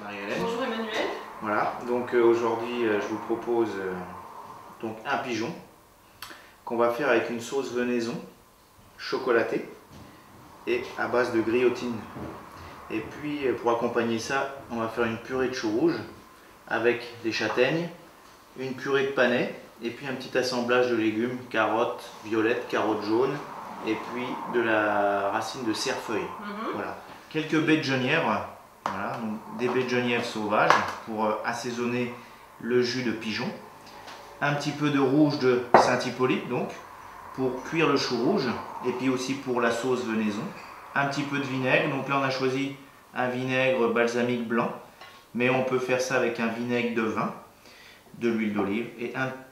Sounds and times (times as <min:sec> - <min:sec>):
Speech: 0:00.0 - 0:04.1, 0:04.8 - 0:05.7, 0:06.7 - 0:08.3, 0:09.0 - 0:09.8, 0:10.7 - 0:12.1, 0:12.9 - 0:18.0, 0:18.6 - 0:33.6, 0:34.4 - 0:36.8, 0:37.4 - 0:44.8, 0:45.4 - 0:47.4, 0:48.2 - 0:49.4.